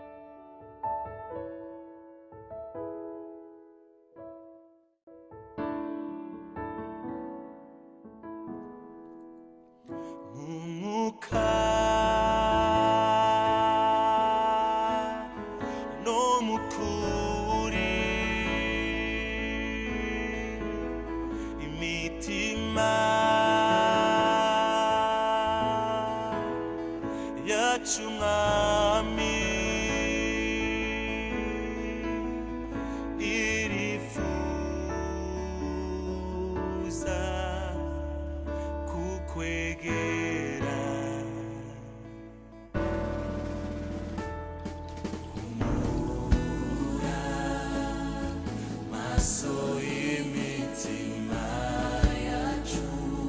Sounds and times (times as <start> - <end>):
Sad music: 5.1 - 53.2.